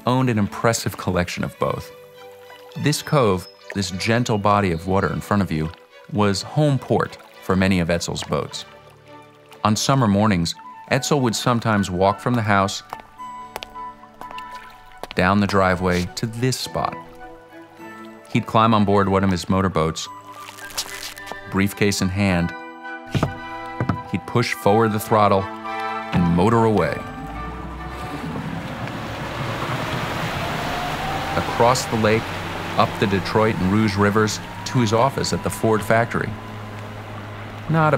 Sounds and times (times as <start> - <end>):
Speech: 0.0 - 1.9, 2.8 - 8.7, 9.6 - 12.9, 15.2 - 17.0, 18.3 - 20.1, 21.5 - 22.6, 24.1 - 25.5, 26.2 - 27.1, 31.4 - 36.4, 37.7 - 37.9
Boat, Water vehicle: 0.0 - 22.4, 23.1 - 37.9
Music: 0.0 - 28.9, 31.3 - 37.9.